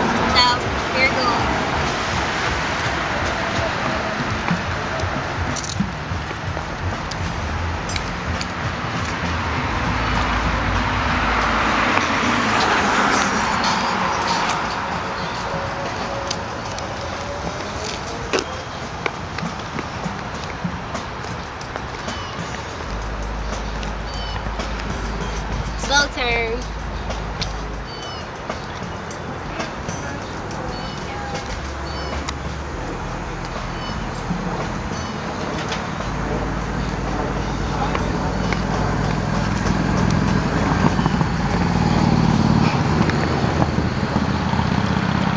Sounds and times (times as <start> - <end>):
Music: 0.0 - 45.3.